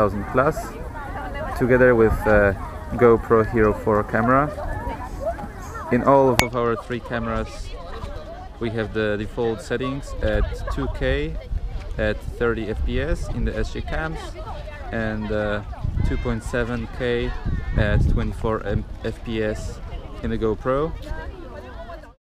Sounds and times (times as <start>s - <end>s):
Hubbub, speech noise, speech babble: 0.0s - 22.2s
Speech: 0.0s - 22.2s.